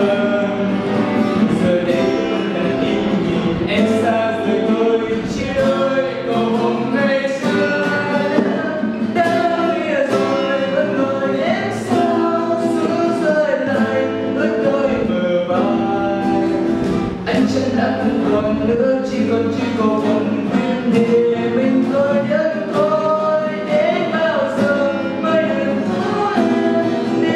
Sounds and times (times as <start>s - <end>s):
Strum: 0.0s - 27.3s.